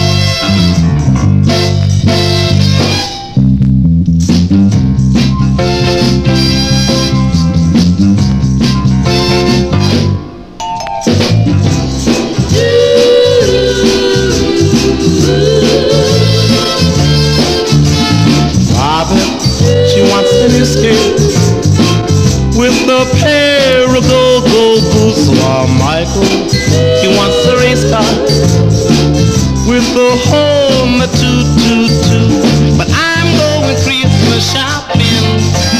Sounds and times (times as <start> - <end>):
Christian music: 0.0 - 3.4, 5.1 - 35.7
Christmas music: 0.0 - 35.7.